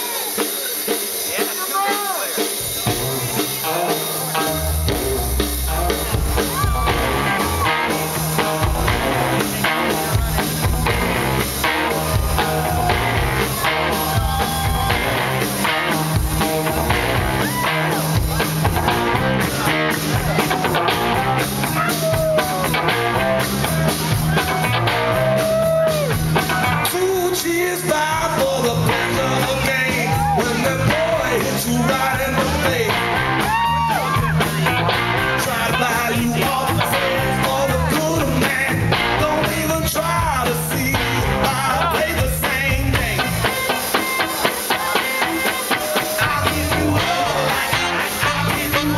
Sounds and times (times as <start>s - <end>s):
Speech: 0.0s - 6.6s, 34.4s - 43.3s.